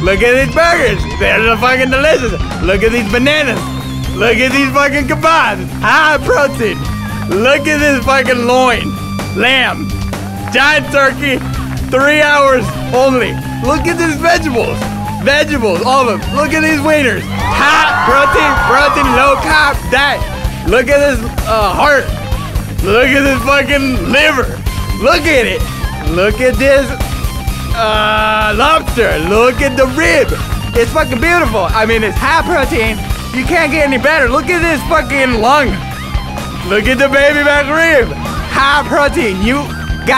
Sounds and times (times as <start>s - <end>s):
Music: 0.0s - 40.1s
Speech: 4.2s - 9.8s, 10.6s - 17.2s, 18.1s - 22.2s, 22.8s - 27.0s, 27.8s - 35.8s, 36.6s - 40.1s.